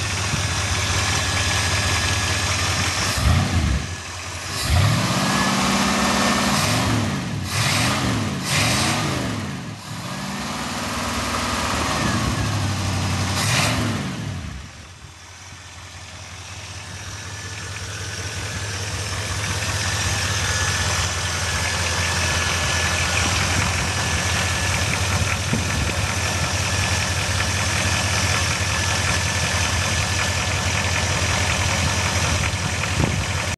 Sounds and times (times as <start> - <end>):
Idling: 0.0 - 6.7, 9.7 - 13.4, 14.3 - 33.5
Medium engine (mid frequency): 0.0 - 33.5
Vehicle: 0.0 - 33.5.